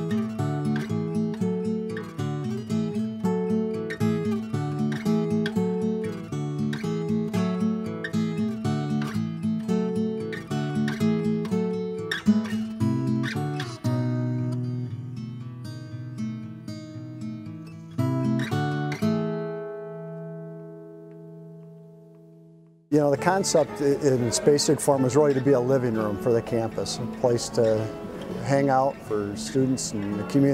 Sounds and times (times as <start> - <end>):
Music: 0.0 - 30.5
Speech: 22.9 - 30.5.